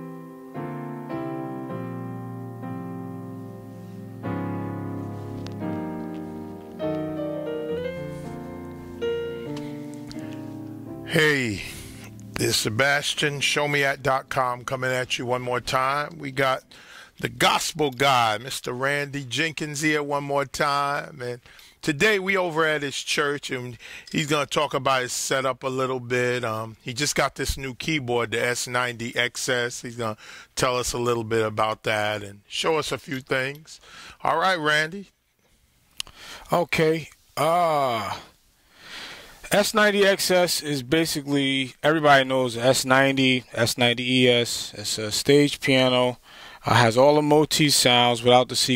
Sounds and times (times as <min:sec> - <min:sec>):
Music: 0:00.0 - 0:13.5
Speech: 0:11.1 - 0:16.6, 0:17.2 - 0:35.1, 0:36.5 - 0:38.3, 0:39.5 - 0:48.7.